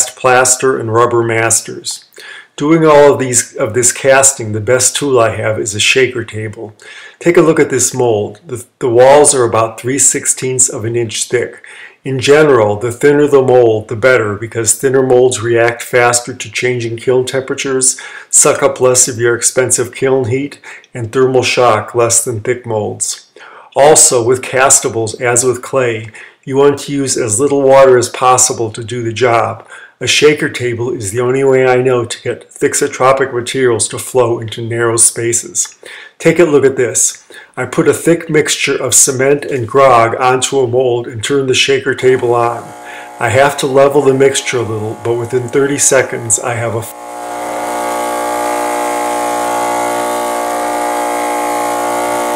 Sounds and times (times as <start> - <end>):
Speech: 0.0 - 47.0.